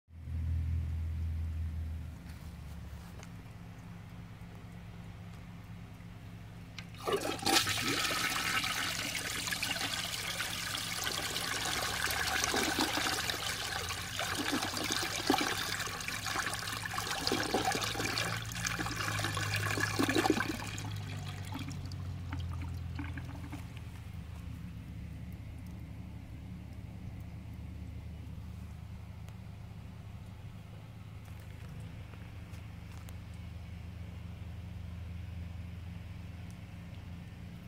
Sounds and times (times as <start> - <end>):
Toilet flush: 6.9 - 23.7.